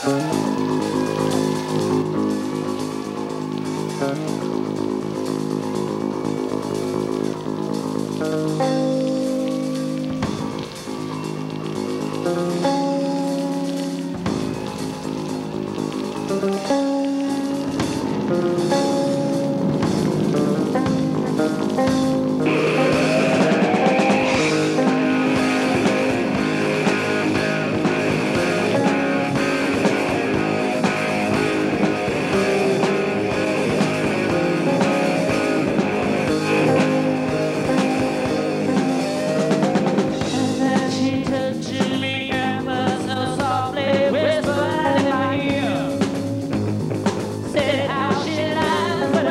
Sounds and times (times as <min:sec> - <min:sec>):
Music: 0:00.0 - 0:49.3.